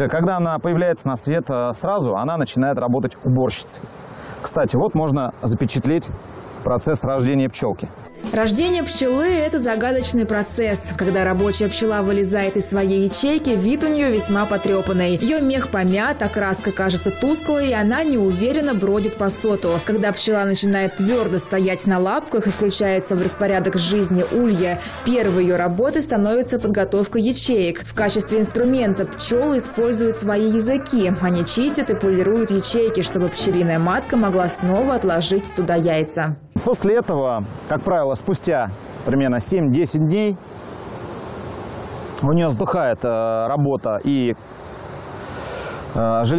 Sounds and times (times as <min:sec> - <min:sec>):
Speech: 0:00.0 - 0:03.8, 0:04.4 - 0:40.4, 0:42.2 - 0:44.4, 0:46.0 - 0:46.3
Music: 0:08.0 - 0:36.5.